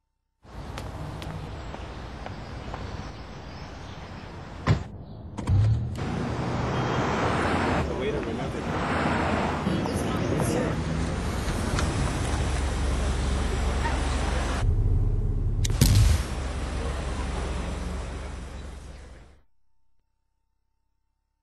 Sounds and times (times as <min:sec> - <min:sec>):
Car passing by: 0:06.0 - 0:14.6
Speech: 0:07.8 - 0:08.9, 0:09.6 - 0:10.8, 0:12.7 - 0:14.6.